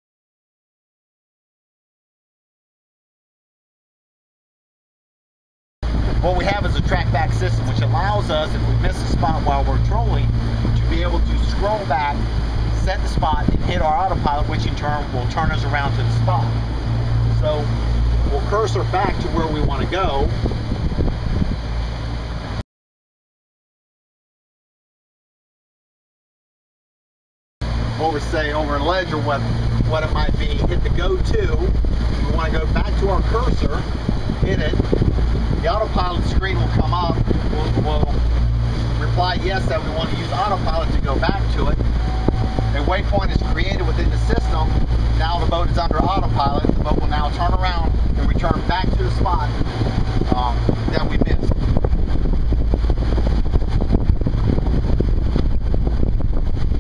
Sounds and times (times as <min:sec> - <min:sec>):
Speech: 0:06.2 - 0:16.6, 0:17.4 - 0:20.3, 0:28.0 - 0:34.8, 0:35.6 - 0:38.2, 0:39.0 - 0:41.8, 0:42.7 - 0:49.6, 0:50.3 - 0:51.6.